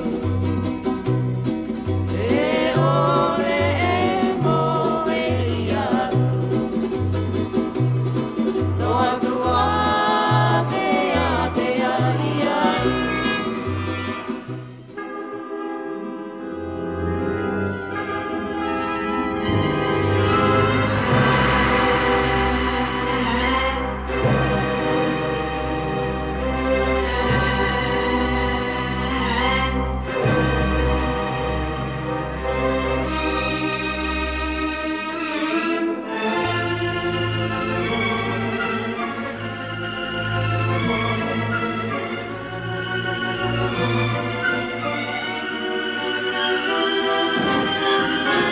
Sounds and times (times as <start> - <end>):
Music: 0.0 - 48.5.